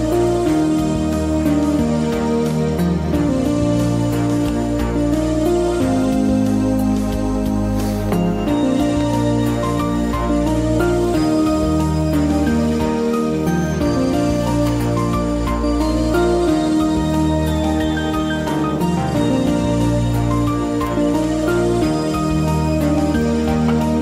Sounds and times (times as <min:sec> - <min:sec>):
Music: 0:00.0 - 0:24.0.